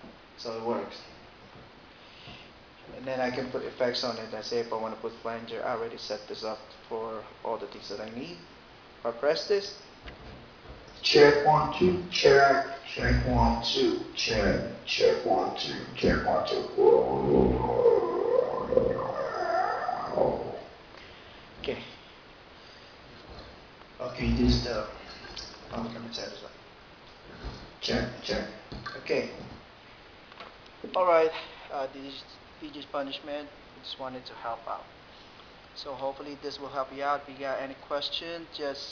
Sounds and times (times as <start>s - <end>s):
Speech: 0.4s - 1.1s, 2.9s - 9.8s, 11.0s - 17.7s, 21.6s - 22.0s, 24.0s - 25.0s, 25.7s - 26.6s, 27.8s - 29.5s, 30.8s - 34.9s, 35.8s - 38.9s.